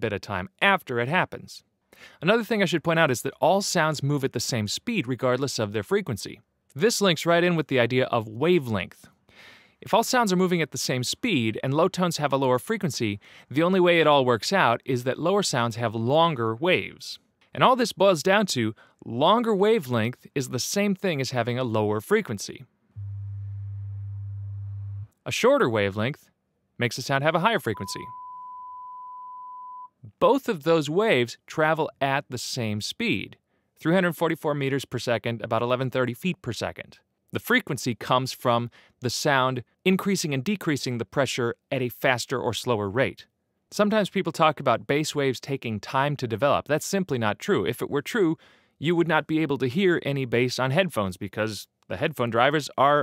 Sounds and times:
Chirp tone: 27.8s - 30.0s.

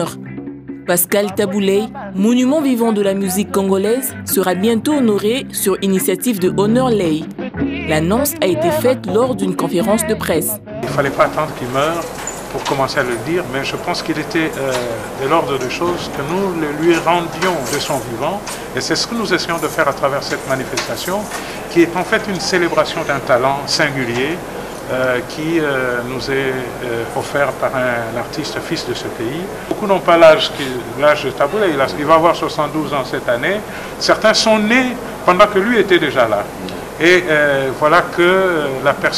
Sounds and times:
Speech: 0.9s - 12.0s, 12.6s - 39.1s.

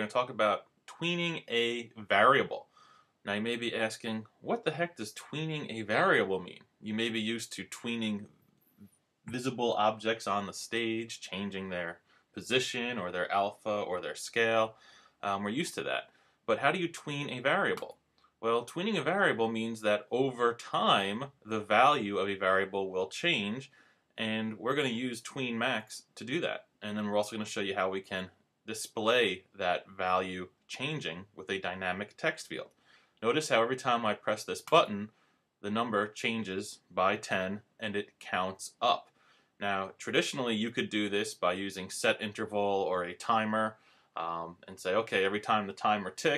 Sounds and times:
Speech: 0.0s - 2.7s, 3.3s - 8.3s, 9.3s - 46.3s.

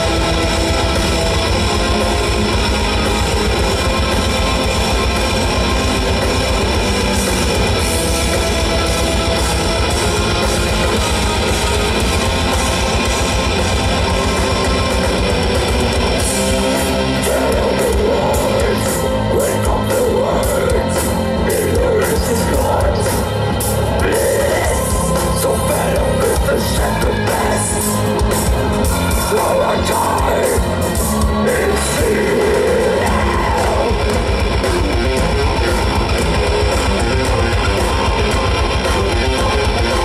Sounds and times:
Music: 0.0s - 40.0s.

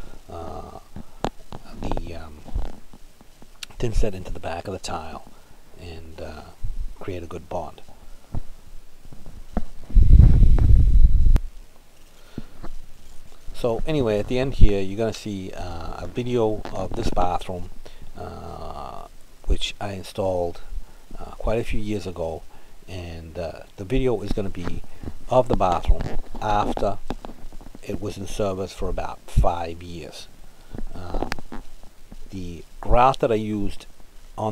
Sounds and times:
Speech: 0.3s - 0.9s, 1.6s - 2.5s, 3.6s - 7.9s, 13.6s - 27.0s, 27.8s - 30.3s, 30.9s - 31.4s, 32.3s - 34.5s.

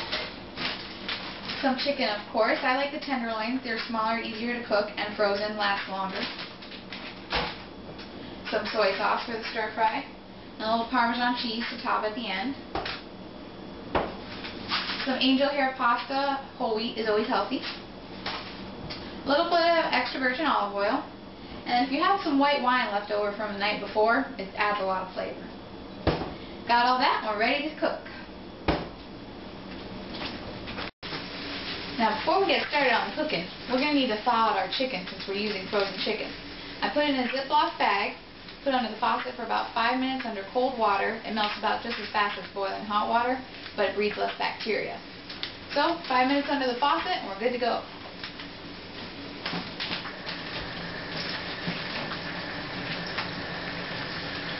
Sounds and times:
Speech: 1.6s - 6.4s, 8.5s - 12.6s, 15.1s - 17.7s, 19.3s - 21.1s, 21.7s - 25.5s, 26.7s - 28.2s, 32.0s - 45.0s, 45.7s - 47.9s.

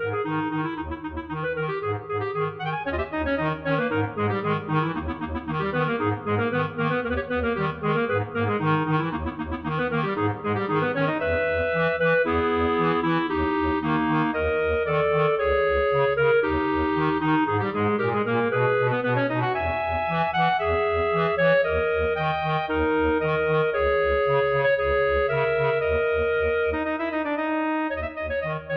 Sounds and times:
Clarinet: 0.0s - 28.7s
Brass instrument: 0.1s - 28.7s.

